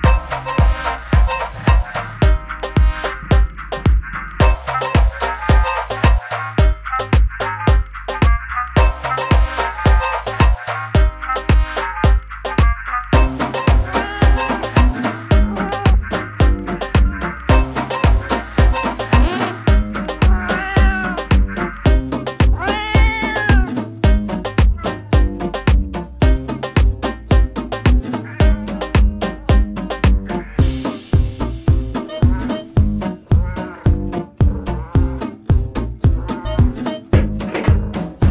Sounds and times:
Music: 0:00.0 - 0:38.3
Meow: 0:14.0 - 0:14.6, 0:20.3 - 0:21.3, 0:22.6 - 0:23.8.

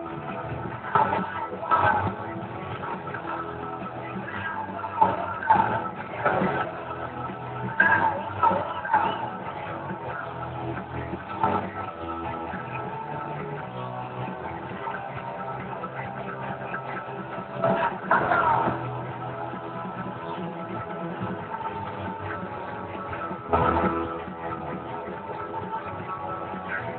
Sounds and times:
Music: 0:00.0 - 0:26.9
Speech: 0:00.8 - 0:22.9.

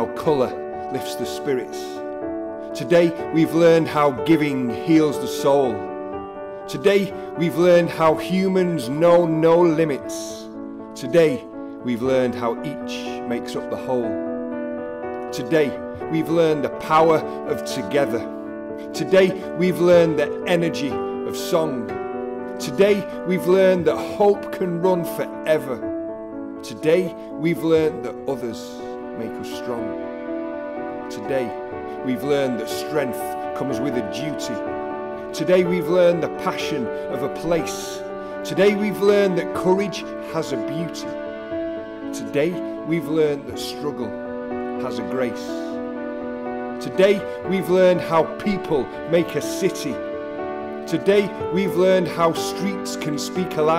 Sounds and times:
Speech: 0:00.0 - 0:02.0, 0:02.8 - 0:05.9, 0:06.7 - 0:14.2, 0:15.3 - 0:18.3, 0:18.9 - 0:21.9, 0:22.6 - 0:25.8, 0:26.6 - 0:29.9, 0:31.1 - 0:34.6, 0:35.3 - 0:41.1, 0:42.1 - 0:44.1, 0:44.8 - 0:45.7, 0:46.8 - 0:50.0, 0:50.9 - 0:53.7
Music: 0:00.0 - 0:53.7.

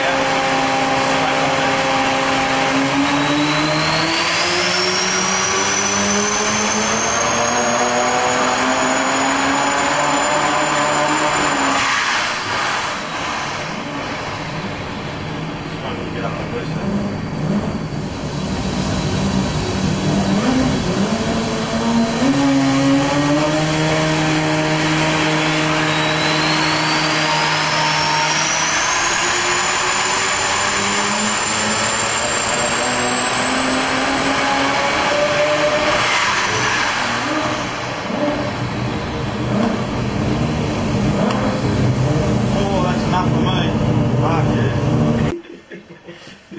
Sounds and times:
Inside, large room or hall: 0:00.0 - 0:38.6
Engine: 0:00.0 - 0:45.6
Speech: 0:01.1 - 0:01.8, 0:15.8 - 0:16.8, 0:42.6 - 0:44.8.

